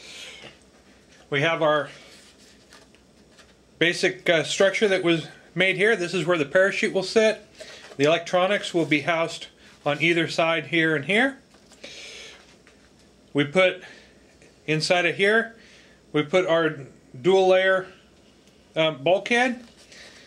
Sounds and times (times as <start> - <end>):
Speech: 1.3 - 2.0, 3.8 - 7.4, 8.0 - 11.4, 13.4 - 13.9, 14.7 - 18.0, 18.8 - 19.7.